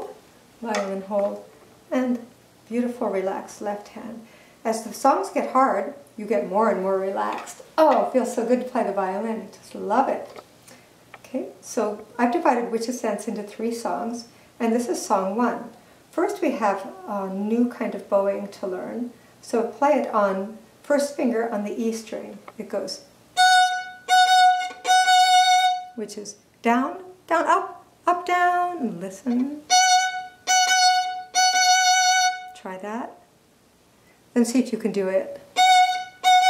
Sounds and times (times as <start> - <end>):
Speech: 0.0 - 10.4, 11.2 - 23.1, 26.0 - 29.7, 32.6 - 33.2, 34.4 - 35.5.